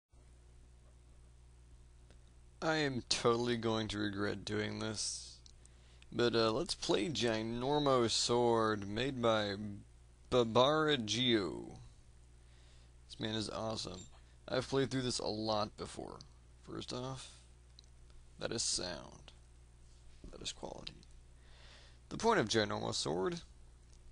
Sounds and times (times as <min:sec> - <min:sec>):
Speech: 0:02.6 - 0:05.4, 0:06.1 - 0:11.9, 0:13.1 - 0:17.4, 0:18.4 - 0:19.4, 0:20.3 - 0:21.1, 0:22.1 - 0:23.5.